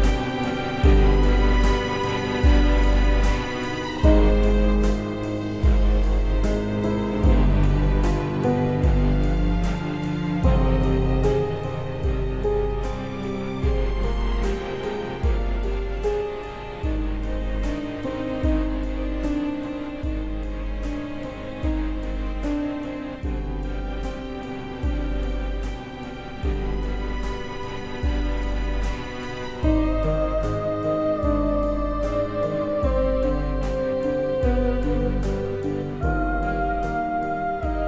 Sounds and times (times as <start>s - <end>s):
Music: 0.0s - 37.8s.